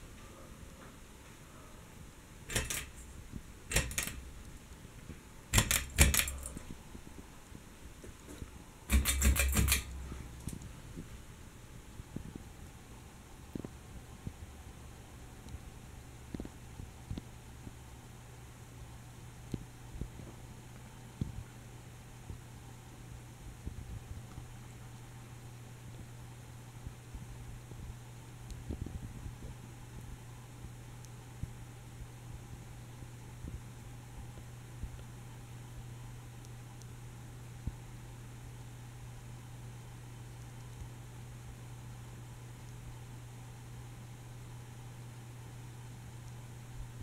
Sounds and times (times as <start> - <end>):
Mechanical fan: 0.0 - 47.0.